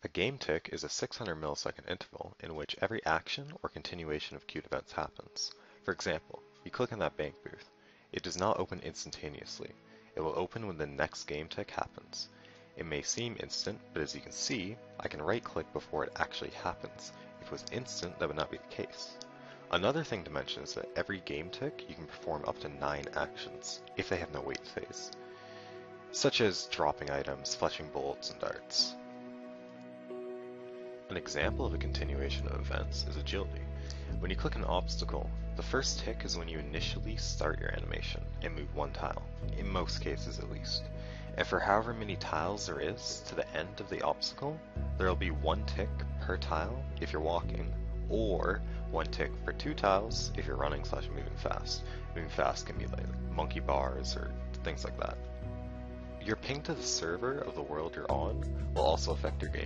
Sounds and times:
Speech: 0.0 - 25.2, 26.1 - 29.0, 31.1 - 55.2, 56.2 - 59.6
Music: 0.0 - 59.6.

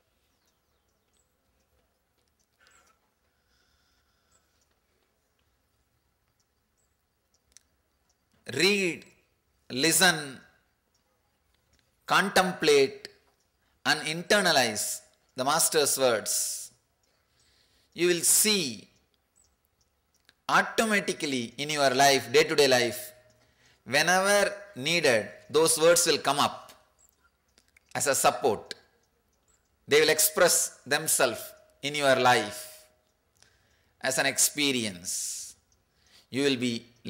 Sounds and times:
Speech: 8.5 - 10.5, 12.1 - 13.1, 13.9 - 16.7, 18.0 - 19.0, 20.5 - 23.2, 23.9 - 26.7, 27.9 - 28.8, 29.9 - 32.8, 34.0 - 35.6, 36.3 - 37.0.

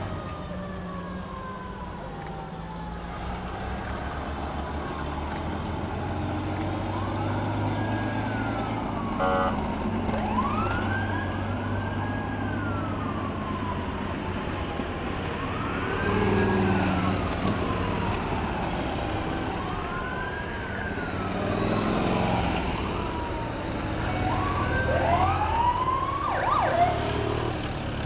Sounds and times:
Car: 0.0 - 28.0
Fire engine, fire truck (siren): 0.0 - 28.0
Motorcycle: 0.0 - 28.0
Outside, urban or manmade: 0.0 - 28.0
Truck: 0.0 - 28.0.

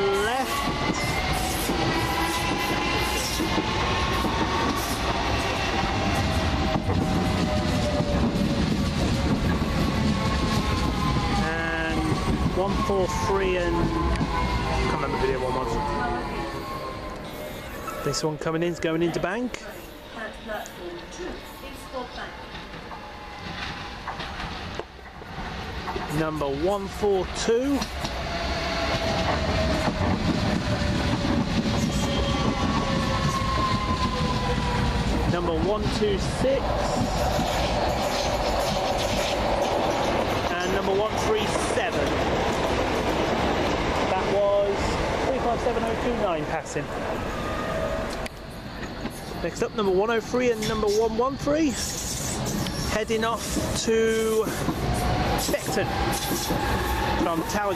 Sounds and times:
Railroad car, train wagon: 0.0 - 57.7
Subway, metro, underground: 0.0 - 57.7
Train: 0.0 - 57.7
Clickety-clack: 27.8 - 28.2, 36.8 - 40.8, 54.4 - 57.6.

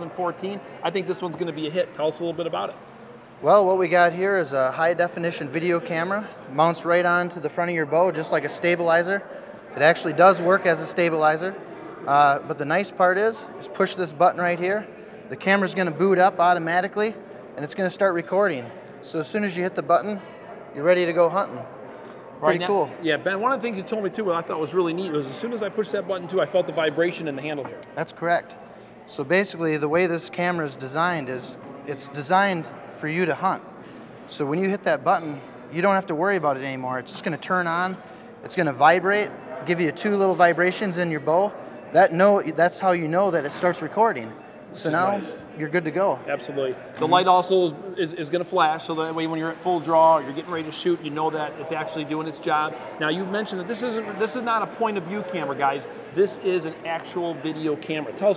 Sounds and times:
Speech: 3.4 - 21.7, 22.4 - 33.6, 34.3 - 58.3.

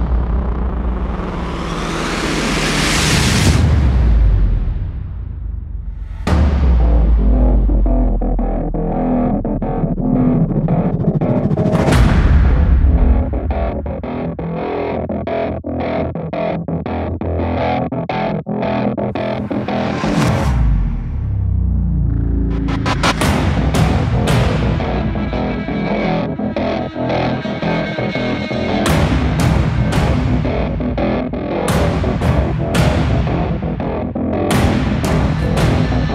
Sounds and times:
Soundtrack music: 0.0 - 15.0, 19.0 - 36.1.

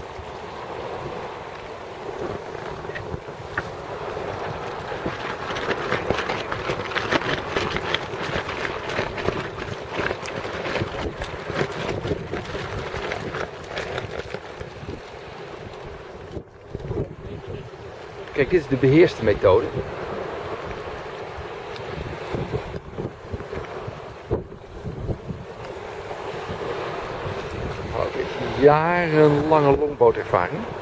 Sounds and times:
Boat, Water vehicle: 0.0 - 30.8.

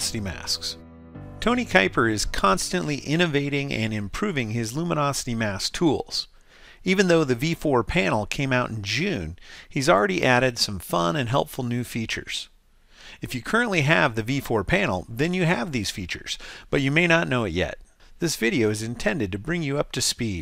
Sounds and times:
Speech: 0.0 - 0.8, 1.4 - 12.5, 13.2 - 20.4.

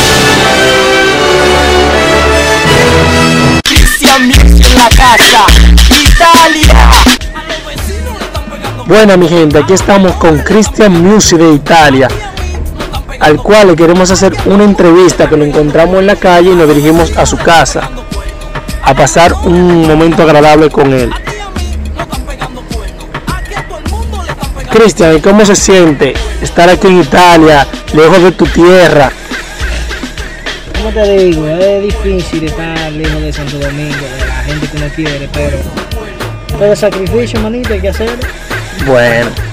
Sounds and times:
Christmas music: 0.0 - 39.5
Speech: 8.8 - 12.2, 13.2 - 18.0, 18.8 - 21.2, 24.7 - 29.1, 30.8 - 35.7, 36.5 - 39.4.

